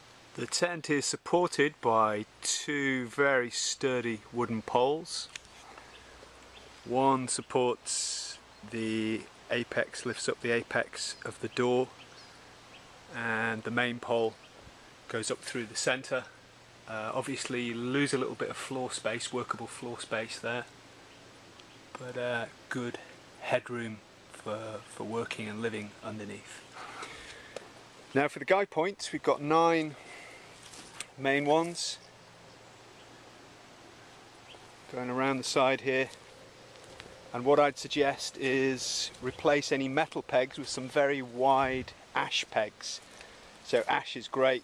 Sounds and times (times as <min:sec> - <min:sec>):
Speech: 0:00.4 - 0:05.4, 0:06.9 - 0:11.9, 0:13.1 - 0:14.4, 0:15.1 - 0:20.7, 0:22.0 - 0:26.7, 0:28.1 - 0:30.0, 0:31.2 - 0:32.0, 0:34.9 - 0:36.2, 0:37.3 - 0:43.0, 0:43.6 - 0:44.6.